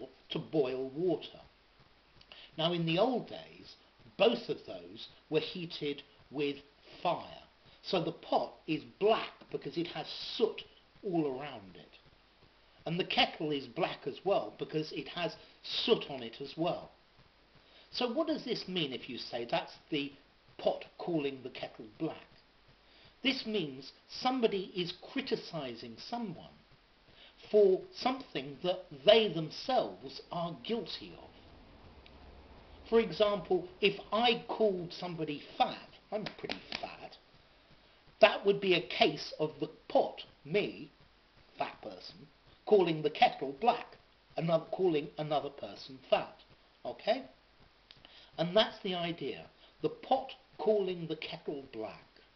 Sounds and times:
Speech: 0.0s - 1.6s, 2.4s - 12.0s, 12.8s - 17.0s, 17.9s - 22.4s, 23.2s - 26.7s, 27.4s - 31.4s, 32.8s - 37.3s, 38.2s - 47.4s, 48.3s - 52.2s.

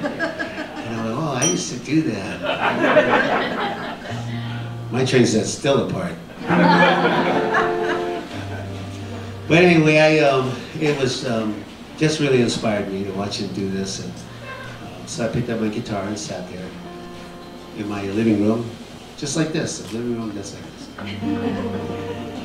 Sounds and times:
Speech: 0.8s - 3.2s, 4.9s - 6.2s, 9.5s - 14.3s, 14.9s - 16.8s, 17.8s - 21.0s
Music: 4.1s - 5.4s, 6.4s - 10.0s, 16.3s - 18.7s, 21.0s - 22.4s.

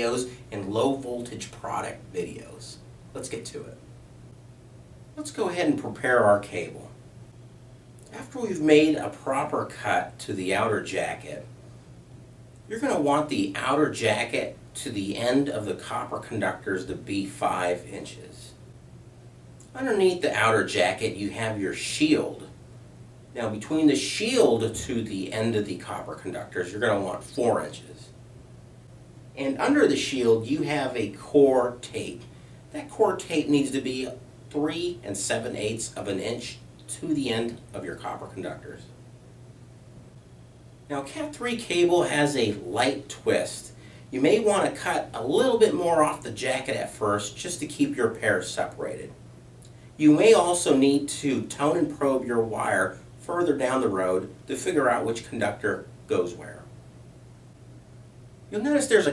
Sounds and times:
Speech: 0.0s - 3.8s, 5.2s - 7.0s, 8.1s - 11.5s, 12.7s - 18.6s, 19.6s - 22.6s, 23.3s - 28.2s, 29.4s - 39.0s, 40.9s - 49.2s, 50.0s - 56.7s, 58.5s - 59.1s.

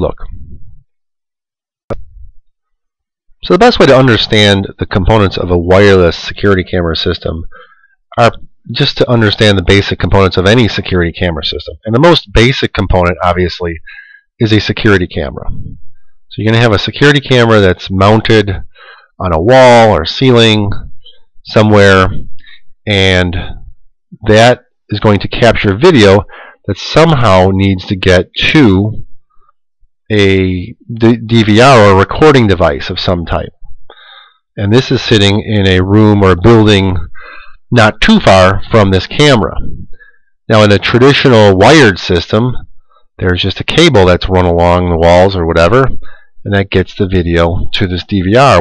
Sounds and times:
Speech: 0.0s - 0.4s, 3.4s - 7.6s, 8.2s - 15.7s, 16.3s - 29.1s, 30.1s - 33.6s, 34.6s - 39.9s, 40.5s - 48.6s.

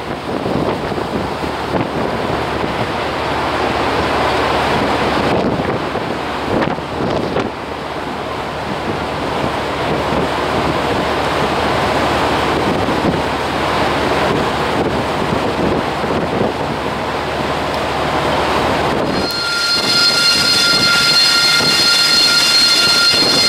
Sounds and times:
Waves, surf: 0.0s - 19.0s
Wind noise (microphone): 0.0s - 21.9s
Ship: 0.0s - 23.4s.

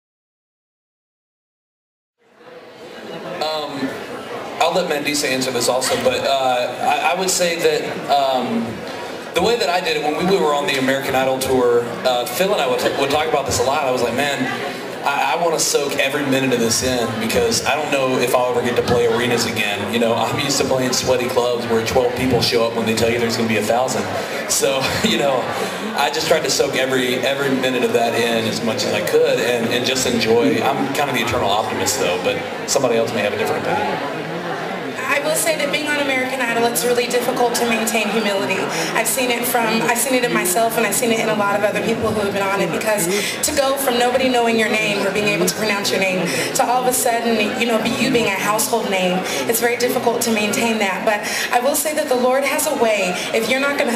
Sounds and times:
Speech: 3.4s - 4.0s, 4.6s - 34.2s, 35.0s - 53.9s.

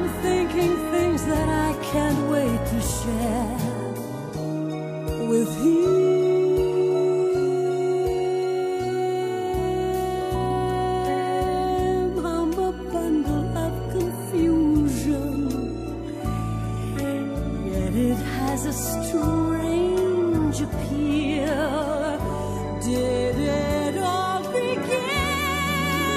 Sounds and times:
Sad music: 0.0s - 26.1s.

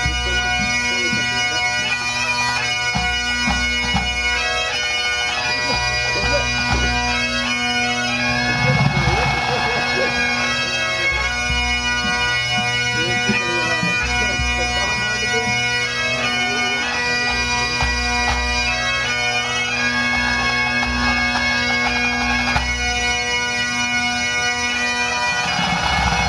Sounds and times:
Bagpipes: 0.0s - 26.2s.

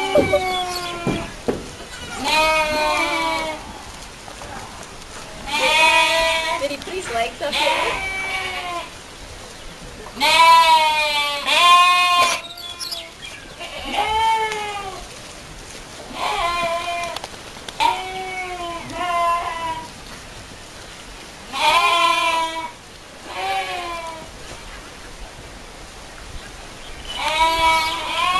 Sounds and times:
Bleat: 0.0s - 1.3s, 2.0s - 3.6s, 5.5s - 6.6s, 7.5s - 8.9s, 10.2s - 15.0s, 16.1s - 17.2s, 17.8s - 19.9s, 21.5s - 24.3s, 27.1s - 28.3s.

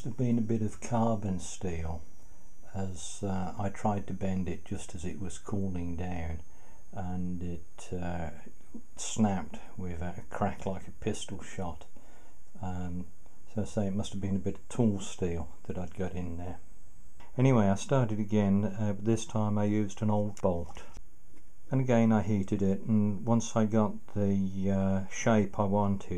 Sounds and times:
Speech: 0.0s - 2.0s, 2.7s - 6.4s, 7.0s - 11.9s, 12.6s - 16.6s, 17.2s - 21.0s, 21.7s - 26.1s.

